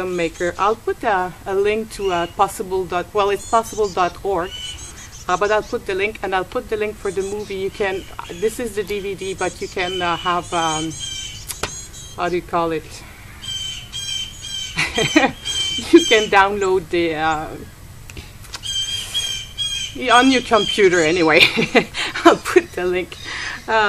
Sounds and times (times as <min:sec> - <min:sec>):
Speech: 0:00.0 - 0:04.6, 0:05.3 - 0:11.0, 0:12.2 - 0:13.0, 0:15.8 - 0:17.7, 0:20.0 - 0:23.8
Outside, rural or natural: 0:00.0 - 0:23.8
Squawk: 0:03.2 - 0:06.0, 0:07.0 - 0:12.4, 0:13.3 - 0:16.4, 0:18.6 - 0:21.7.